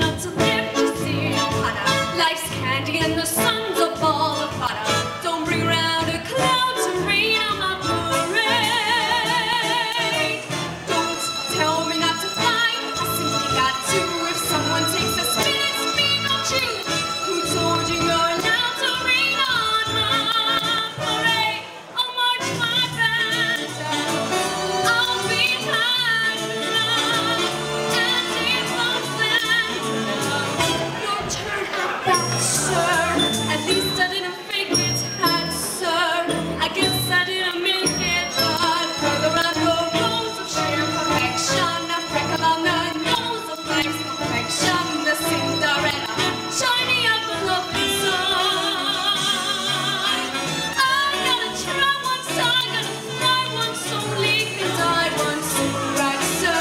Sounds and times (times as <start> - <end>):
Music: 0.0 - 56.6.